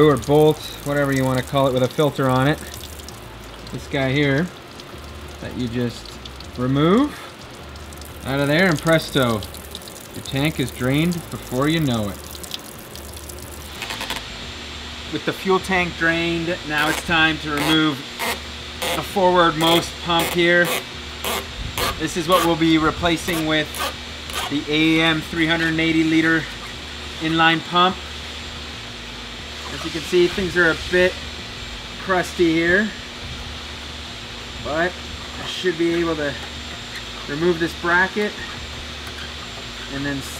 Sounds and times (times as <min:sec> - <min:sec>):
Speech: 0:00.0 - 0:02.7, 0:03.7 - 0:04.5, 0:05.4 - 0:06.0, 0:06.6 - 0:07.2, 0:08.3 - 0:09.5, 0:10.2 - 0:12.2, 0:15.1 - 0:18.0, 0:19.0 - 0:20.7, 0:22.0 - 0:23.7, 0:24.5 - 0:26.5, 0:27.2 - 0:28.0, 0:29.7 - 0:31.2, 0:32.0 - 0:33.0, 0:34.6 - 0:36.4, 0:37.3 - 0:38.4, 0:39.9 - 0:40.3.